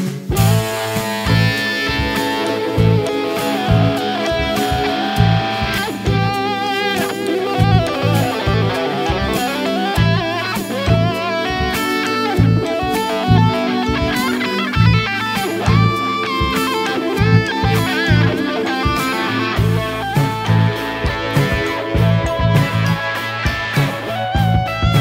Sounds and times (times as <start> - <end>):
Bass guitar: 0.0 - 25.0
Drum: 0.0 - 25.0
Electric guitar: 0.0 - 25.0
Rock music: 0.0 - 25.0.